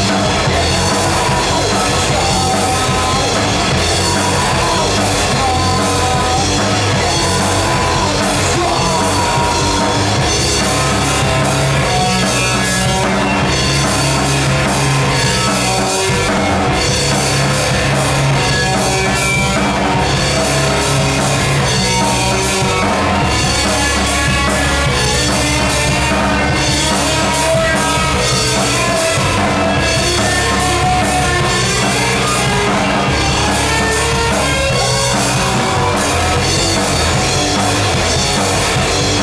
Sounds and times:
Drum: 0:00.0 - 0:39.2
Drum kit: 0:00.0 - 0:39.2
Guitar: 0:00.0 - 0:39.2
Rock music: 0:00.0 - 0:39.2.

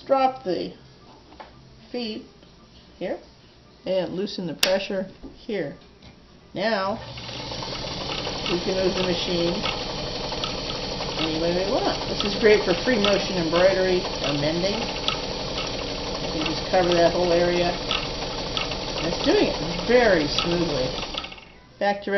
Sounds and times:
Speech: 0:03.0 - 0:05.9, 0:06.6 - 0:07.0, 0:08.5 - 0:09.6, 0:11.2 - 0:14.9, 0:16.4 - 0:17.8, 0:19.1 - 0:21.0, 0:21.8 - 0:22.1
Sewing machine: 0:07.0 - 0:21.5.

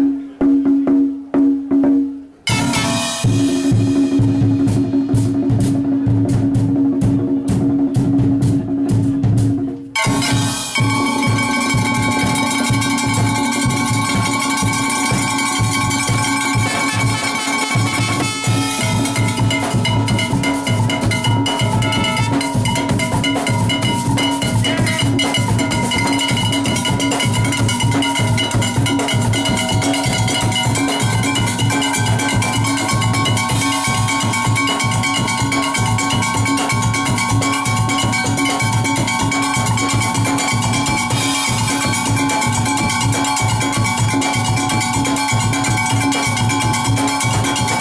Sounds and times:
Music: 0:00.0 - 0:47.8.

